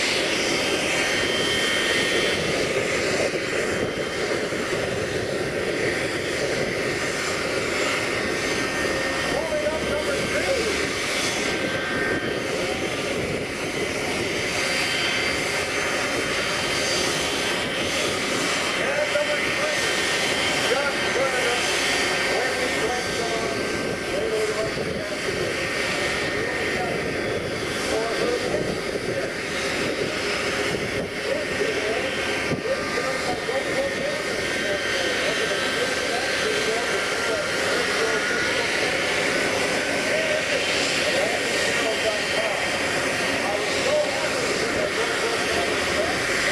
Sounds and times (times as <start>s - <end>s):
Jet engine: 0.0s - 46.5s.